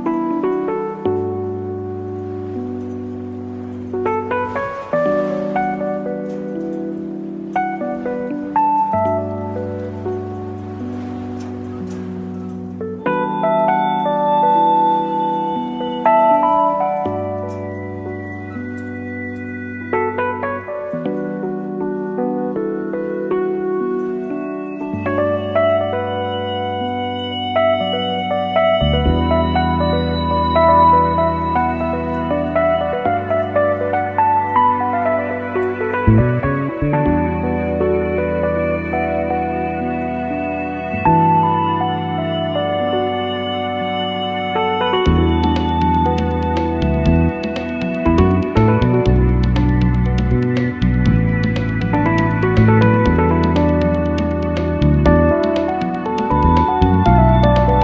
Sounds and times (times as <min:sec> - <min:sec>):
Music: 0:00.0 - 0:57.8.